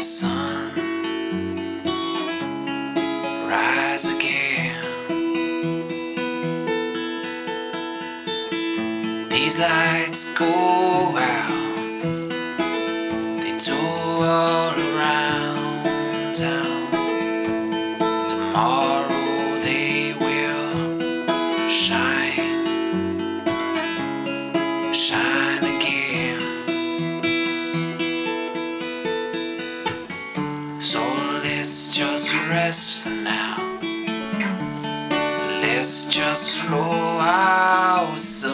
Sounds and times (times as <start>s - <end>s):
Music: 0.0s - 38.5s.